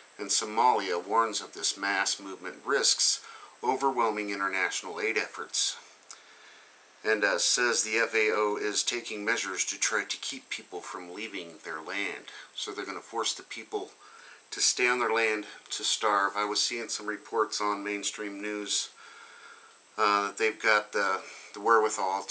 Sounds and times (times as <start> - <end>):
Speech: 0.2 - 5.9, 7.0 - 19.0, 20.0 - 22.3.